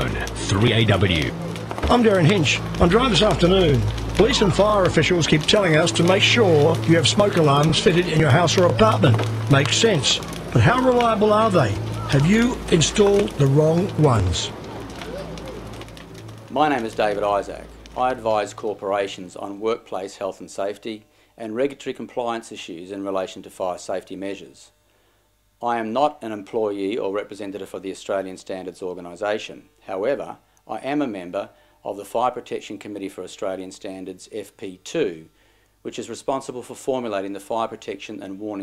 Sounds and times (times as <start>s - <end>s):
Speech: 0.0s - 14.5s, 16.5s - 24.8s, 25.6s - 38.6s.